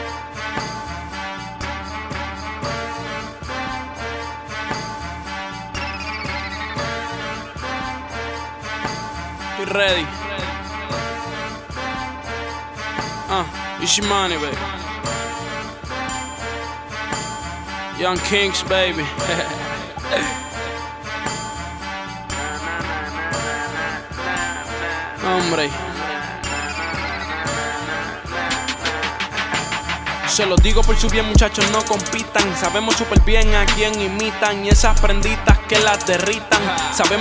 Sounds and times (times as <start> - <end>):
Music: 0.0 - 37.2.